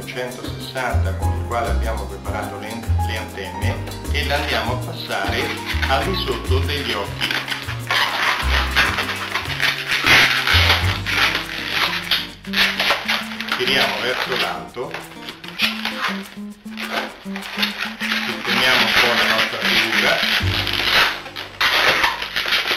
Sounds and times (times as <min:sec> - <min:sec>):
Speech: 0:00.0 - 0:07.2, 0:13.6 - 0:15.0, 0:18.3 - 0:20.3
Music: 0:00.0 - 0:22.7.